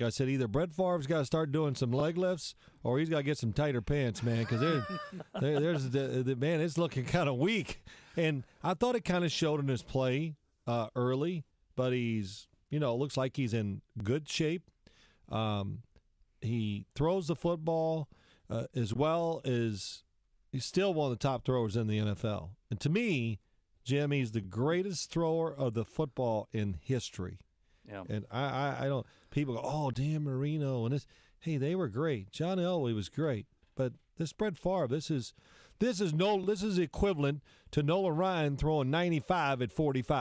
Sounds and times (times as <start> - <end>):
Speech: 0.0 - 14.6, 15.3 - 15.8, 16.4 - 20.0, 20.6 - 40.2.